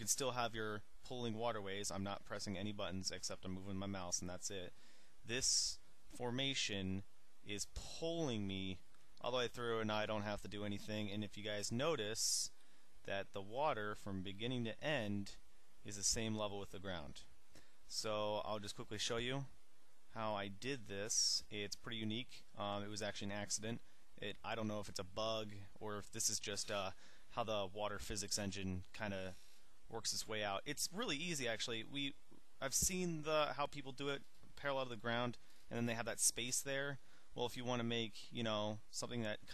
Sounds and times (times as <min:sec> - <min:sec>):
Speech: 0:00.0 - 0:17.3, 0:17.9 - 0:39.5.